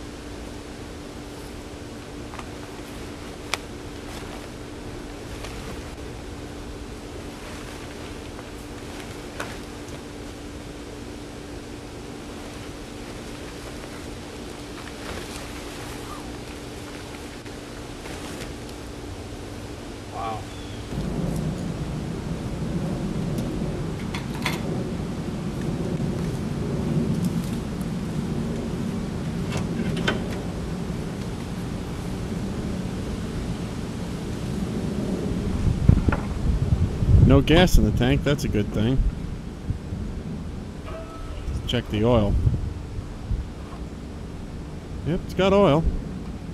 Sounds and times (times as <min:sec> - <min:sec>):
Speech: 0:37.3 - 0:39.0, 0:41.5 - 0:42.4, 0:45.1 - 0:45.9.